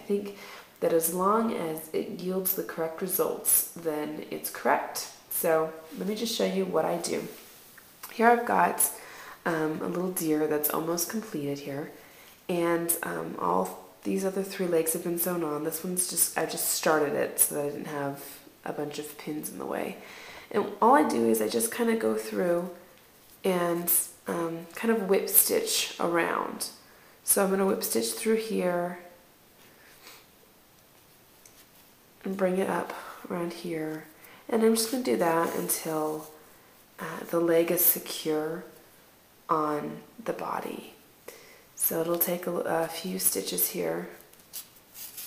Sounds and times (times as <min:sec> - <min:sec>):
Speech: 0:00.0 - 0:07.4, 0:08.1 - 0:22.8, 0:23.4 - 0:29.1, 0:32.2 - 0:36.4, 0:37.0 - 0:38.8, 0:39.5 - 0:41.0, 0:41.8 - 0:44.2.